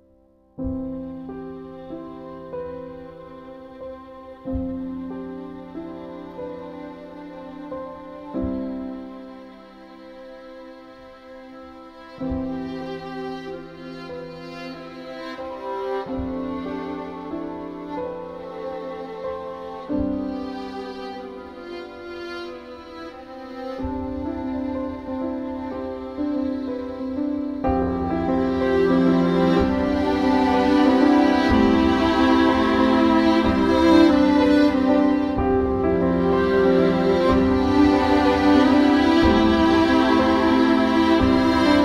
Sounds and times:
Music: 0.0 - 41.8.

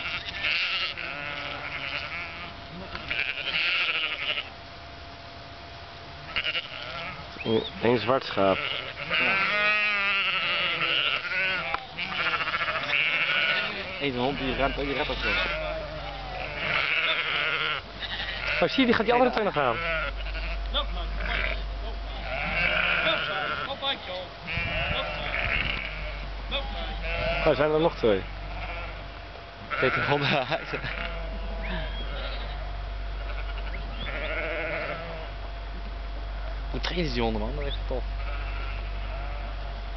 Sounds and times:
Livestock, farm animals, working animals: 0.0 - 39.9.

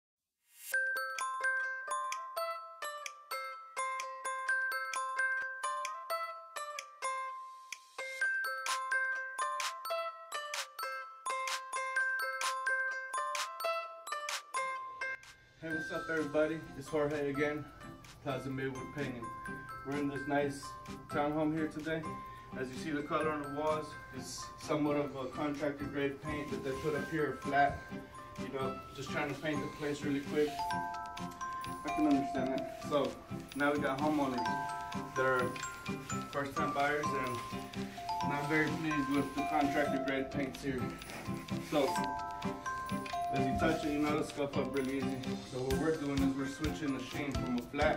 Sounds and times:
Glockenspiel: 0.6 - 47.9.

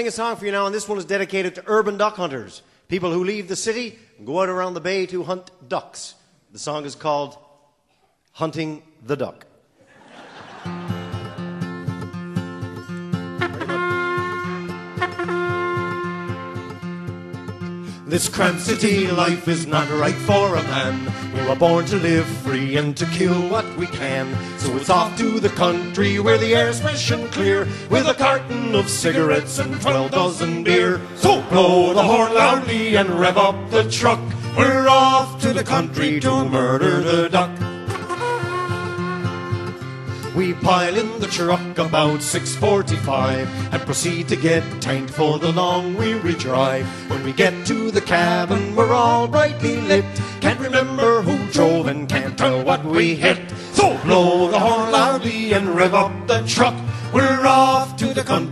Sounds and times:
Music: 10.6 - 58.5.

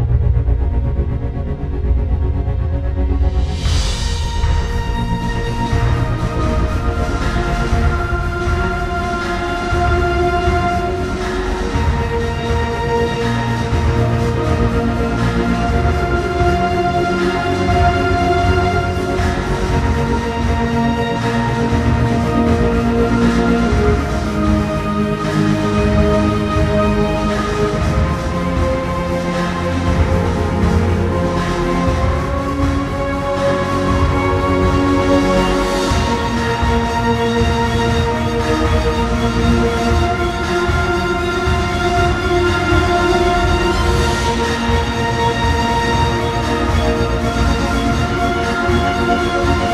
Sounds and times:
New-age music: 0.0 - 49.7.

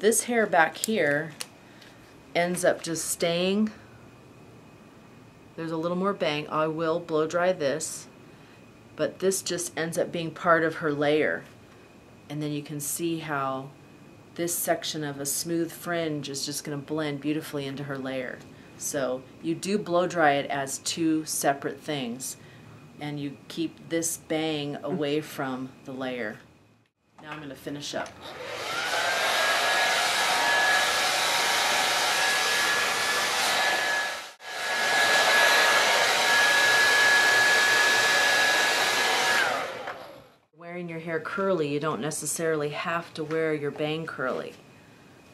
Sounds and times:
Speech: 0.0 - 1.4, 2.4 - 3.8, 5.6 - 8.1, 9.0 - 11.5, 12.3 - 13.8, 14.4 - 22.4, 23.0 - 26.4, 27.2 - 28.2, 40.6 - 44.6
Inside, small room: 0.0 - 45.3.

